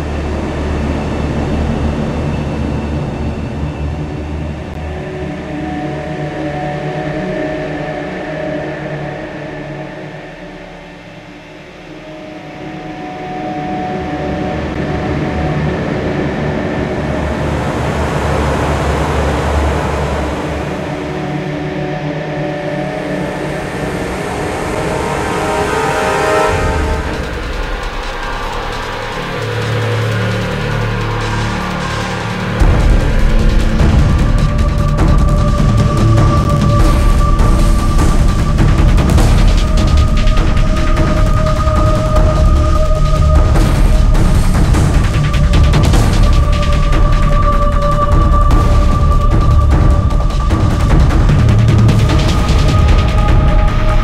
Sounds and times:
Music: 0:00.0 - 0:54.0.

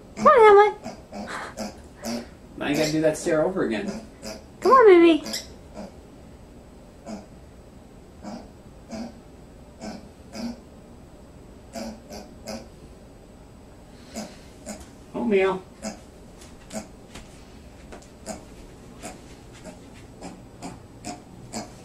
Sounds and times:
Speech: 0:00.2 - 0:00.8, 0:02.6 - 0:04.0, 0:04.6 - 0:05.3, 0:15.2 - 0:15.7
Oink: 0:00.2 - 0:03.0, 0:03.8 - 0:04.5, 0:05.2 - 0:06.0, 0:07.0 - 0:07.3, 0:08.2 - 0:09.2, 0:09.8 - 0:10.6, 0:11.7 - 0:12.7, 0:14.1 - 0:14.9, 0:15.8 - 0:16.0, 0:18.2 - 0:21.8.

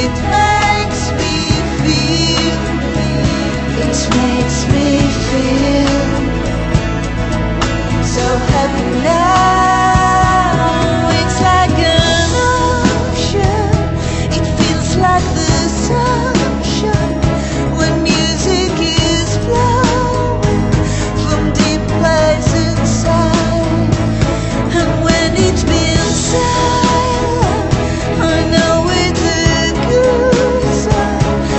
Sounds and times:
Singing: 0:00.0 - 0:06.7, 0:08.0 - 0:31.5
Music: 0:00.0 - 0:31.5.

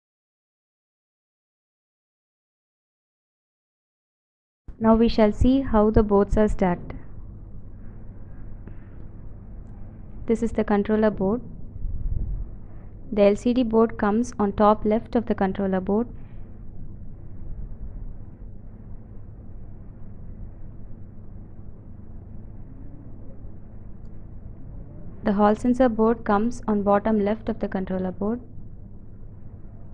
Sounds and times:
Speech: 0:04.8 - 0:07.0, 0:10.3 - 0:11.5, 0:13.1 - 0:16.1, 0:25.3 - 0:28.5.

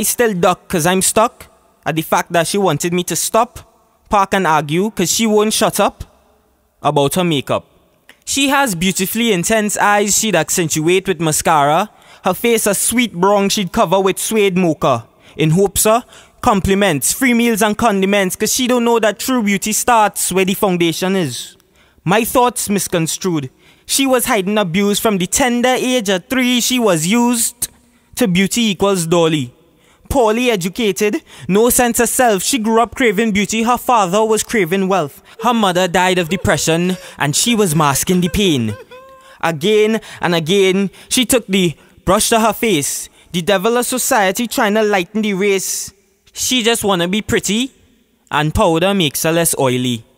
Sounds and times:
Male speech, man speaking: 0:00.0 - 0:06.1, 0:06.8 - 0:07.6, 0:08.3 - 0:29.5, 0:30.1 - 0:47.7, 0:48.3 - 0:50.1
Narration, monologue: 0:00.0 - 0:50.1.

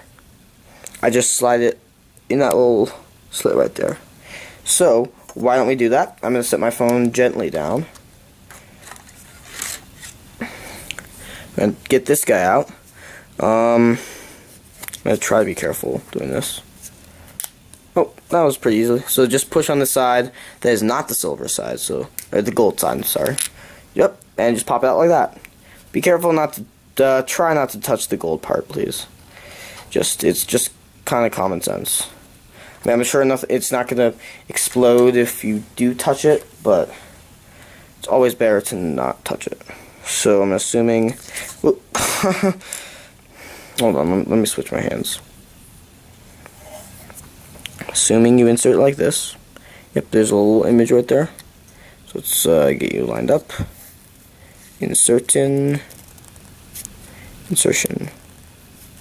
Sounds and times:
Speech: 0:01.0 - 0:04.0, 0:04.6 - 0:08.0, 0:11.6 - 0:12.8, 0:13.4 - 0:14.0, 0:15.0 - 0:16.7, 0:18.0 - 0:23.4, 0:24.0 - 0:29.1, 0:29.9 - 0:32.2, 0:32.8 - 0:37.0, 0:38.0 - 0:41.8, 0:43.8 - 0:45.3, 0:47.8 - 0:49.4, 0:50.0 - 0:51.4, 0:52.1 - 0:53.8, 0:54.8 - 0:55.9, 0:57.5 - 0:58.2.

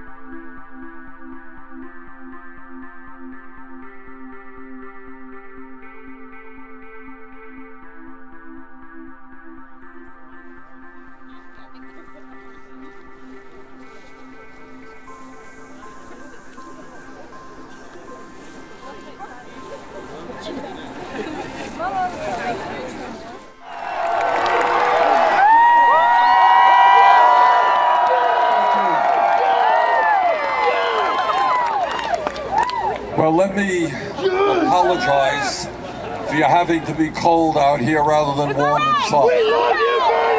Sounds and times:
Male speech, man speaking: 0:33.2 - 0:35.7, 0:36.3 - 0:39.6.

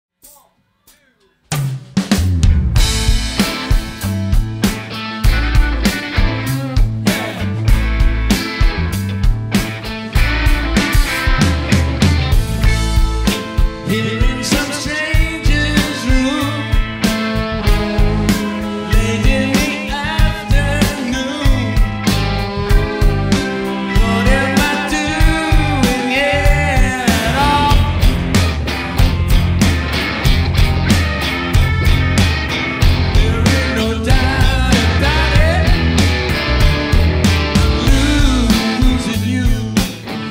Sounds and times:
Drum kit: 0:00.1 - 0:40.3
Speech: 0:00.2 - 0:01.5.

